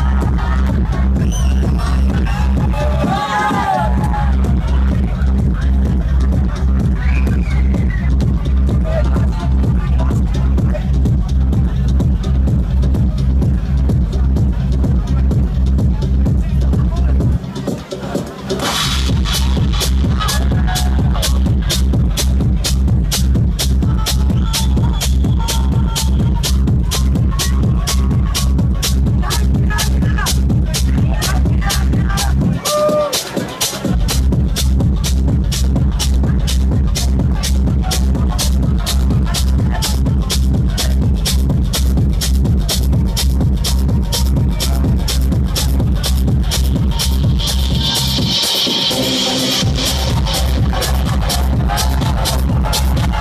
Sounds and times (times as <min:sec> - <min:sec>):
Exciting music: 0:00.0 - 0:53.2.